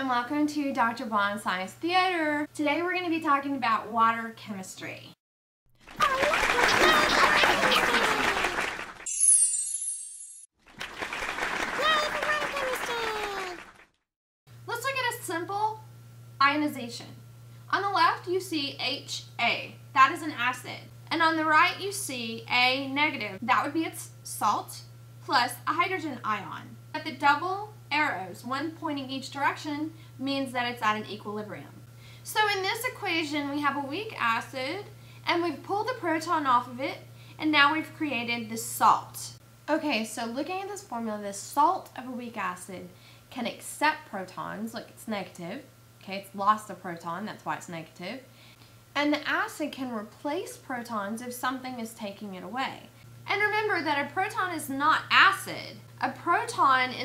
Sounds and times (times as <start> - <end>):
Speech: 0.0 - 5.2, 6.0 - 8.5, 11.8 - 13.6, 14.7 - 48.3, 49.0 - 57.0.